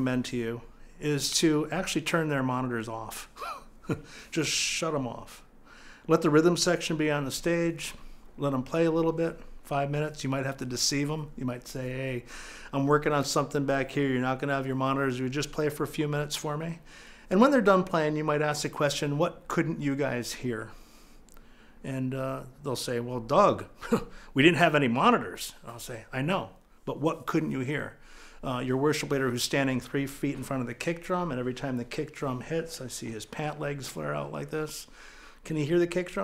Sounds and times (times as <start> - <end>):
Speech: 0.0 - 3.4, 4.3 - 5.5, 6.1 - 20.8, 21.8 - 36.2.